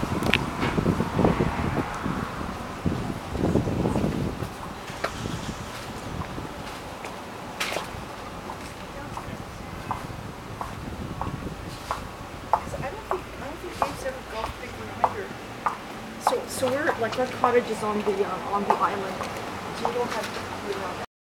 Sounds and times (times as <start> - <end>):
Speech: 8.6 - 10.1, 12.6 - 15.4, 16.2 - 21.1.